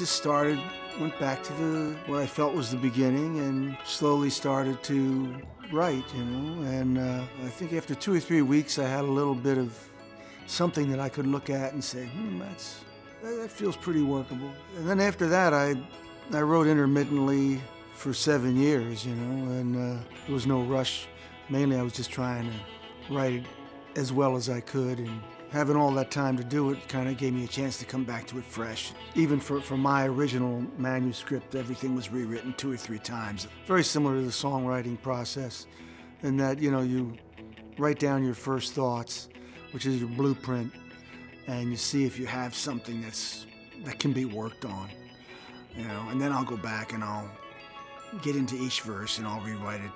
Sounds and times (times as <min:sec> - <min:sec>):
Speech: 0:00.0 - 0:09.8, 0:10.5 - 0:37.2, 0:37.8 - 0:40.7, 0:41.5 - 0:45.0, 0:45.7 - 0:47.4, 0:48.1 - 0:49.9
Music: 0:00.0 - 0:49.9.